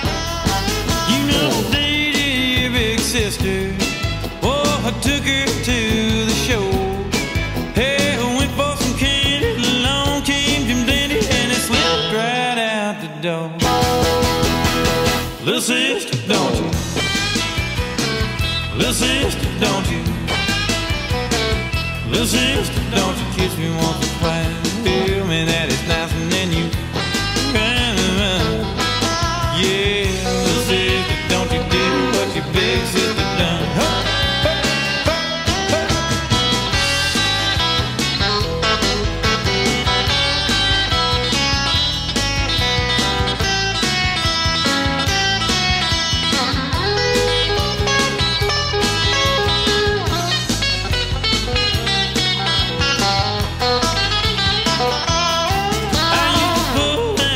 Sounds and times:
Music: 0:00.0 - 0:57.3.

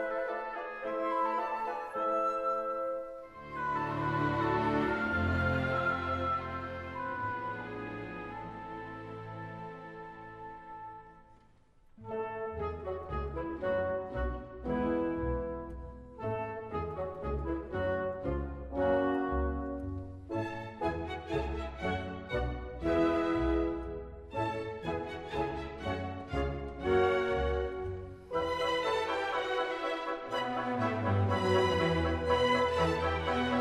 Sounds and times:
Music: 0:00.0 - 0:33.6.

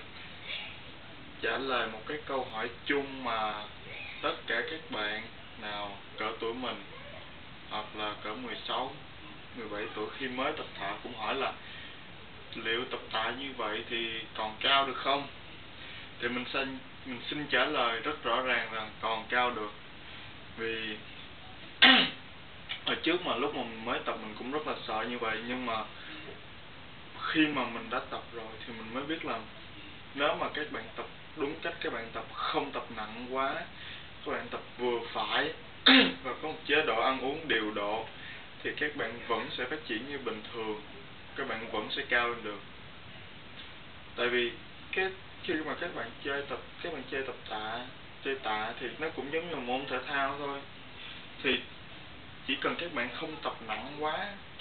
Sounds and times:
Speech: 0:00.4 - 0:11.6, 0:12.5 - 0:15.4, 0:16.2 - 0:19.8, 0:20.6 - 0:26.4, 0:27.2 - 0:42.7, 0:44.2 - 0:50.7, 0:51.4 - 0:51.7, 0:52.4 - 0:54.6.

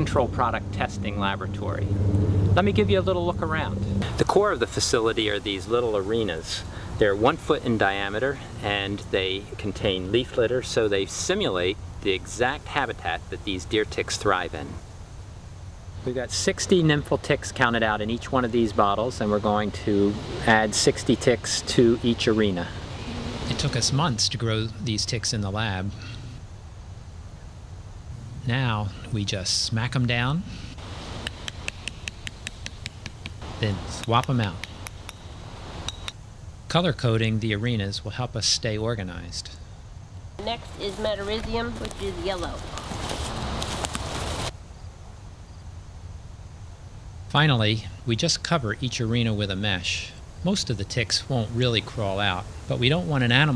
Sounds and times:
Speech: 0:00.0 - 0:01.9, 0:02.6 - 0:14.8, 0:16.0 - 0:22.8, 0:23.5 - 0:26.0, 0:28.4 - 0:30.5, 0:33.6 - 0:34.6, 0:36.7 - 0:39.6, 0:40.4 - 0:42.7, 0:47.3 - 0:53.5.

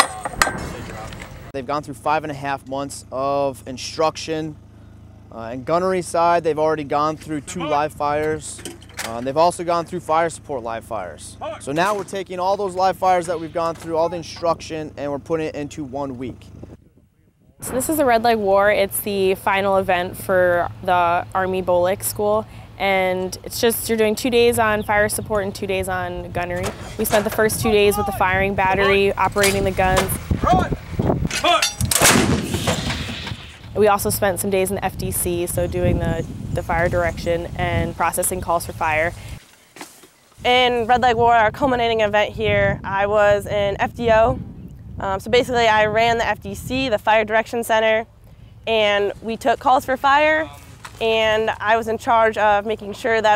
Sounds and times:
Outside, urban or manmade: 0:00.0 - 0:53.3
Speech: 0:05.3 - 0:16.4, 0:17.6 - 0:30.8, 0:33.8 - 0:39.1, 0:40.4 - 0:44.4, 0:48.7 - 0:53.3.

